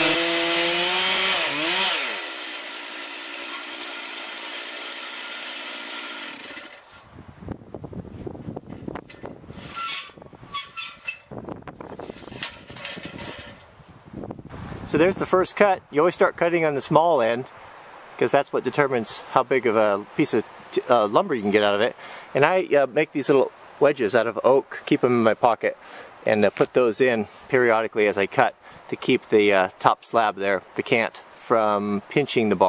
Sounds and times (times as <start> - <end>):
Chainsaw: 0.0 - 7.0
Outside, rural or natural: 0.0 - 32.6.